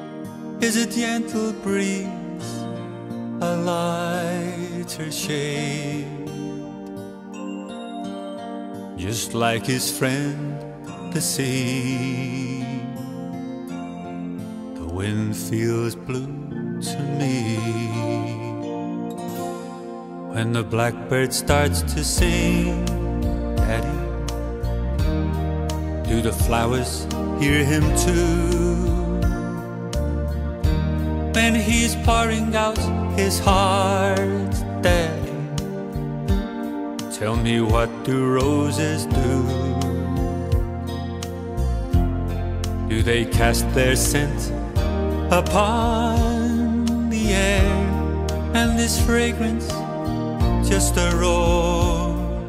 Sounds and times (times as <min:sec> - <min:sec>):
Music: 0:00.0 - 0:52.4.